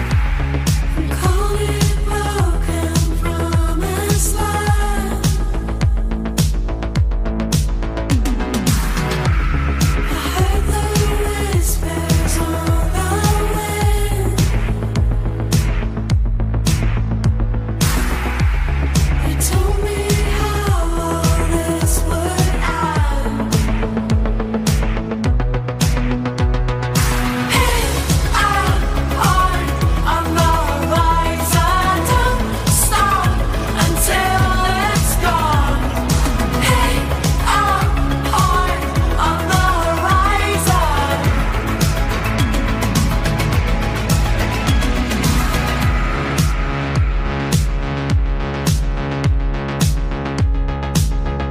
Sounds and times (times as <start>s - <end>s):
Music: 0.0s - 51.5s.